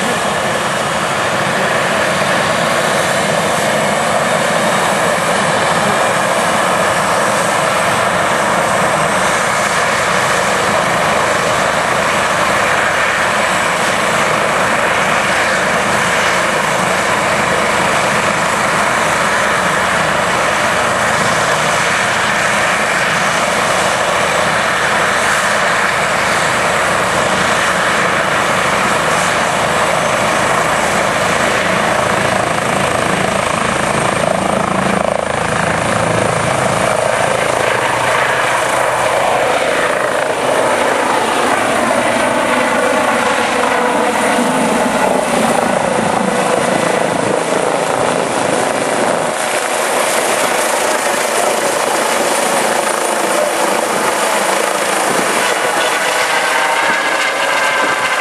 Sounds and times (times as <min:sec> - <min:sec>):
Helicopter: 0:00.0 - 0:58.2
Propeller, airscrew: 0:00.0 - 0:58.2.